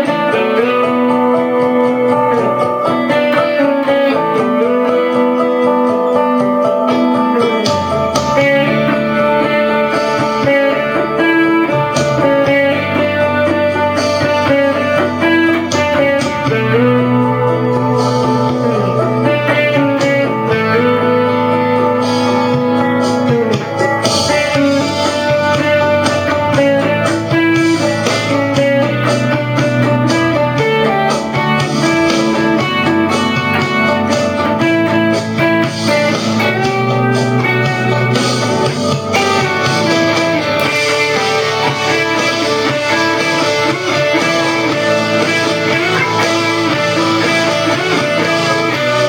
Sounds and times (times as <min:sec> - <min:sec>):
Acoustic guitar: 0:00.0 - 0:49.0
Electric guitar: 0:00.0 - 0:49.0.